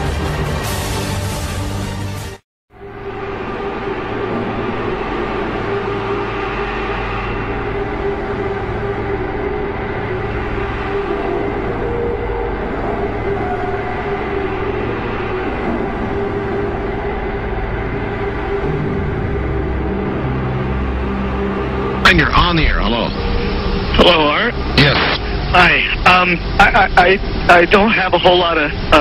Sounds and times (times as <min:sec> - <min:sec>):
Music: 0:00.0 - 0:26.0
Speech: 0:22.0 - 0:23.2, 0:24.0 - 0:29.0.